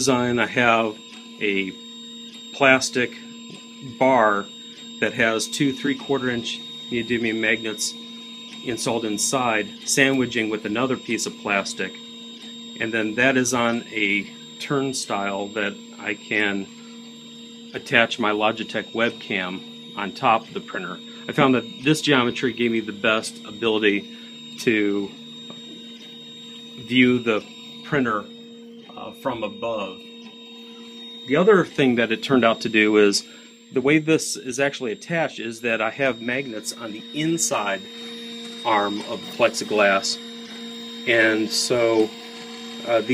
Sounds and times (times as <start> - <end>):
Speech: 0.0 - 1.8, 2.6 - 8.0, 8.6 - 12.0, 12.8 - 16.7, 17.8 - 25.2, 26.8 - 28.3, 28.9 - 30.0, 31.3 - 37.9, 38.6 - 40.2, 41.1 - 42.2, 42.8 - 43.1
Inside, small room: 0.0 - 43.1.